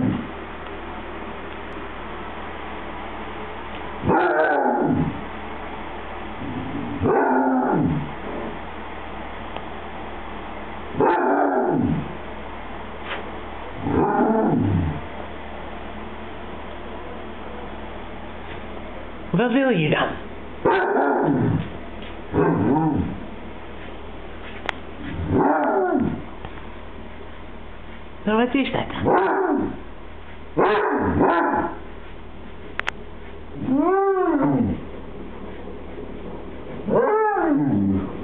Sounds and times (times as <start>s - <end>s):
Bow-wow: 4.0s - 5.1s, 7.0s - 8.0s, 11.0s - 12.0s, 13.8s - 15.0s, 20.6s - 21.6s, 22.4s - 23.2s, 25.2s - 26.2s, 29.0s - 29.8s, 30.6s - 31.8s
Speech: 19.3s - 20.3s, 28.2s - 29.1s.